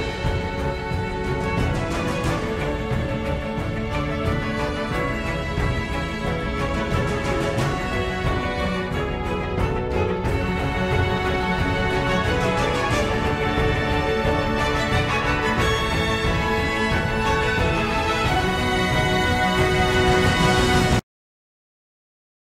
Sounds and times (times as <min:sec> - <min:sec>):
Music: 0:00.0 - 0:21.0.